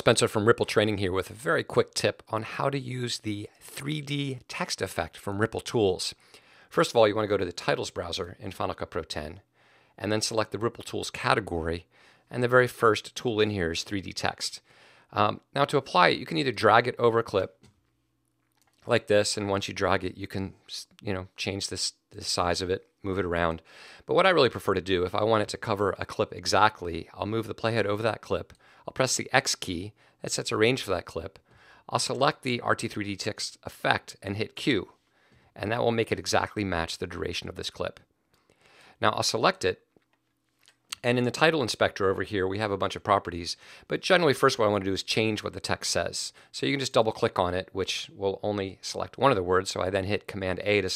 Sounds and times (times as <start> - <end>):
Speech: 0.0 - 17.6, 18.8 - 35.0, 35.6 - 38.1, 39.0 - 39.9, 40.9 - 50.9.